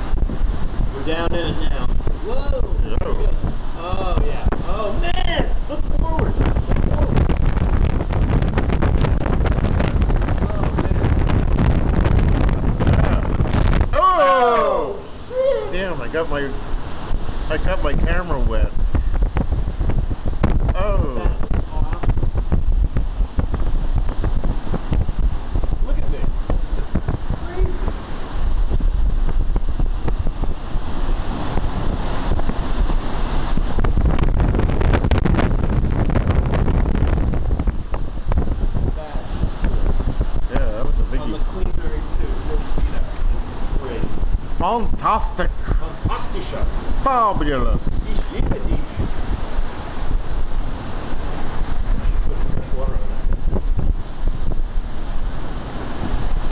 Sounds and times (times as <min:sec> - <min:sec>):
Waves, surf: 0:00.0 - 0:56.5.